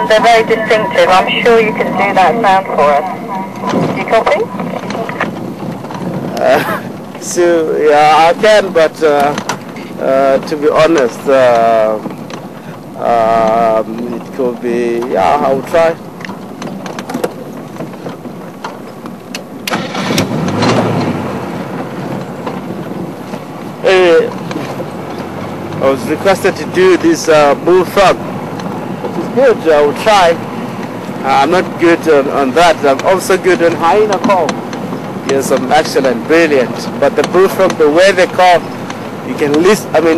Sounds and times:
Speech: 0:00.0 - 0:05.2, 0:06.3 - 0:09.4, 0:10.0 - 0:12.0, 0:13.0 - 0:16.0, 0:23.8 - 0:24.4, 0:25.8 - 0:28.2, 0:29.2 - 0:30.4, 0:31.2 - 0:34.5, 0:35.3 - 0:38.6, 0:39.3 - 0:40.1.

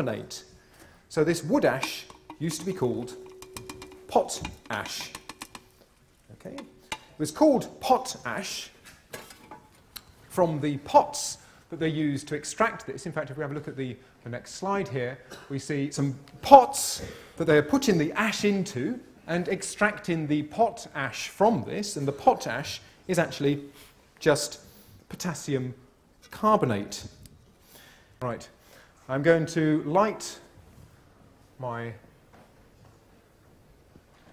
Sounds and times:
Speech: 0:00.0 - 0:00.5, 0:01.1 - 0:03.2, 0:04.1 - 0:05.2, 0:06.3 - 0:08.8, 0:10.3 - 0:27.2, 0:28.2 - 0:30.5, 0:31.6 - 0:32.1.

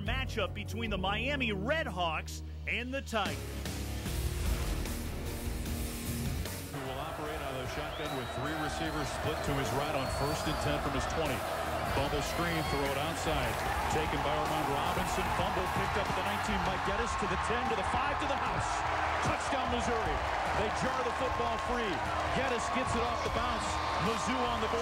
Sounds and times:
Speech: 0:00.0 - 0:03.4, 0:06.8 - 0:24.8.

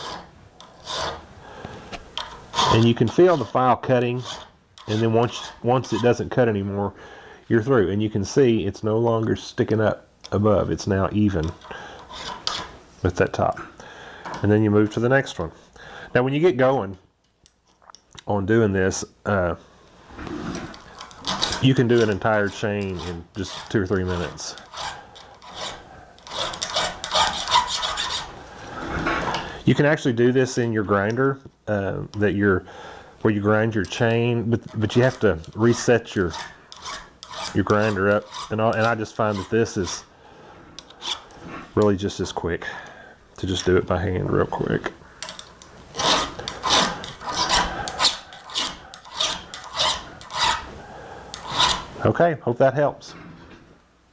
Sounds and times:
Inside, small room: 0:00.0 - 0:54.1
Speech: 0:02.7 - 0:11.6, 0:13.0 - 0:13.7, 0:14.4 - 0:17.0, 0:18.2 - 0:19.6, 0:21.6 - 0:24.6, 0:29.6 - 0:36.5, 0:37.5 - 0:40.1, 0:41.8 - 0:42.8, 0:43.4 - 0:45.0, 0:52.0 - 0:53.2.

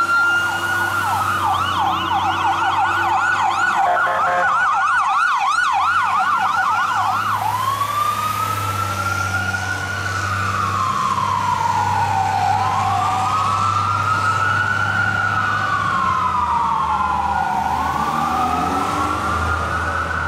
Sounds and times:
Fire engine, fire truck (siren): 0:00.0 - 0:20.2.

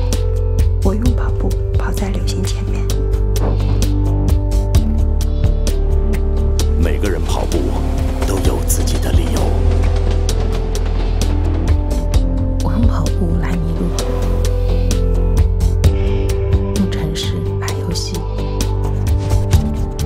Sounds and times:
Music: 0:00.0 - 0:20.0
Speech: 0:06.8 - 0:09.6.

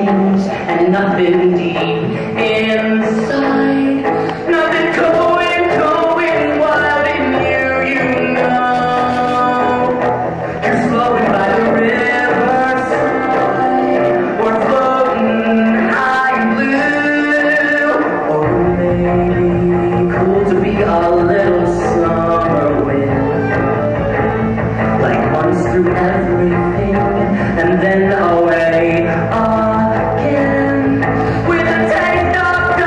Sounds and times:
Music: 0:00.0 - 0:32.8.

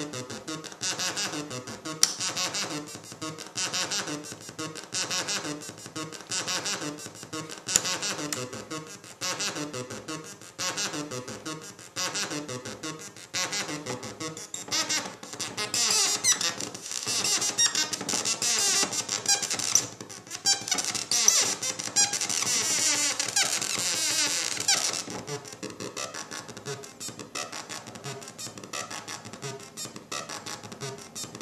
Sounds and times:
Synthesizer: 0:00.0 - 0:31.4.

